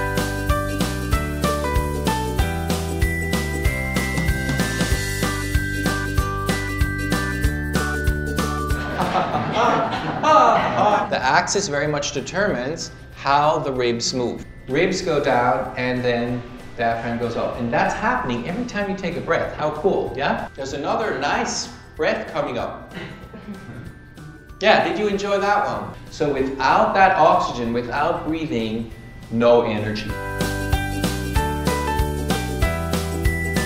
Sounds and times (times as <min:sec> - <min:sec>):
Music: 0:00.0 - 0:33.6
Speech: 0:10.3 - 0:22.8, 0:24.6 - 0:30.2.